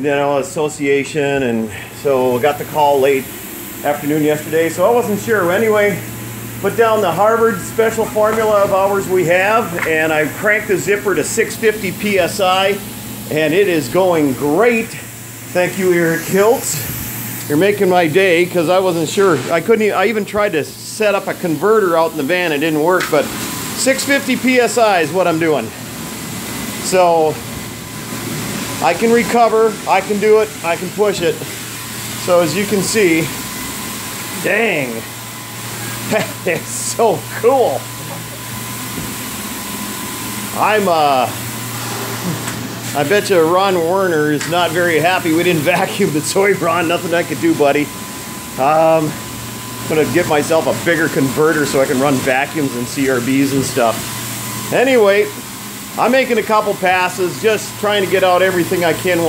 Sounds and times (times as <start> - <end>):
Speech: 0.0 - 16.9, 17.5 - 25.8, 26.8 - 27.4, 28.8 - 31.6, 32.2 - 33.4, 34.4 - 35.1, 36.0 - 38.4, 40.5 - 41.4, 42.9 - 48.0, 48.6 - 49.2, 49.9 - 54.0, 54.7 - 55.4, 56.0 - 59.2.